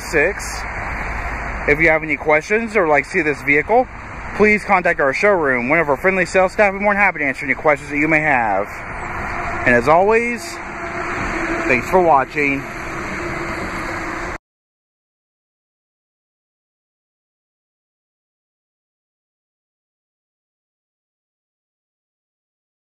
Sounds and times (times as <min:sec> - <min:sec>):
Speech: 0:00.0 - 0:00.6, 0:01.7 - 0:08.8, 0:09.6 - 0:10.6, 0:11.7 - 0:12.6
Car: 0:00.0 - 0:14.4.